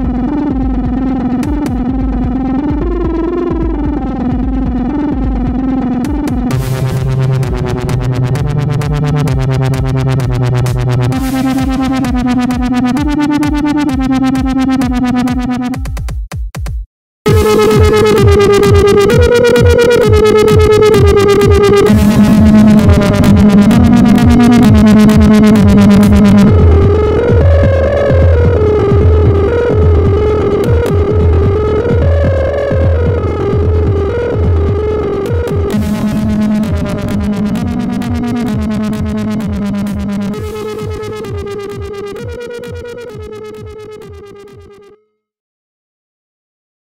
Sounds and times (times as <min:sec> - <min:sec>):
Dubstep: 0:00.0 - 0:15.8, 0:17.3 - 0:44.3
Techno: 0:00.0 - 0:16.2, 0:17.3 - 0:44.9.